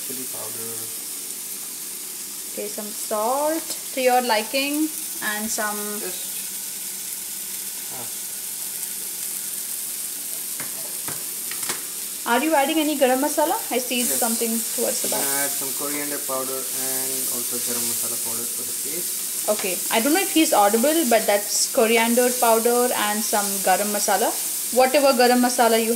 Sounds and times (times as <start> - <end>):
Speech: 0.0 - 0.9, 2.6 - 6.3, 7.9 - 8.1, 12.3 - 25.9
Inside, small room: 0.0 - 25.9.